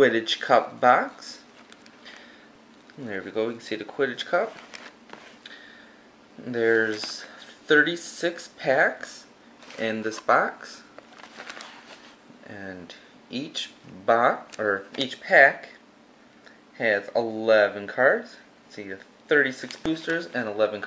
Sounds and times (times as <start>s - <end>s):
Speech: 0.0s - 1.5s, 2.9s - 4.6s, 6.4s - 10.9s, 12.4s - 15.8s, 16.8s - 20.8s
Inside, small room: 0.0s - 20.8s.